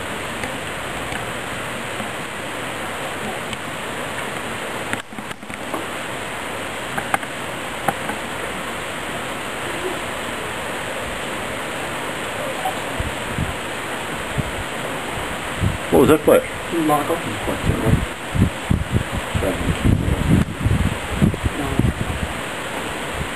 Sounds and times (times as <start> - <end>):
Speech: 15.9 - 18.0, 19.4 - 19.7, 21.6 - 22.2.